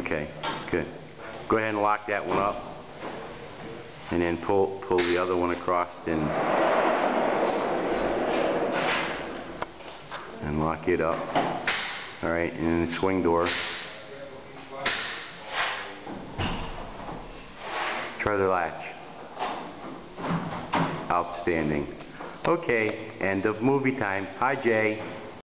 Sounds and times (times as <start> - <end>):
Speech: 0.0 - 2.6, 4.1 - 6.4, 10.4 - 11.3, 12.2 - 15.0, 18.2 - 19.0, 21.1 - 25.1.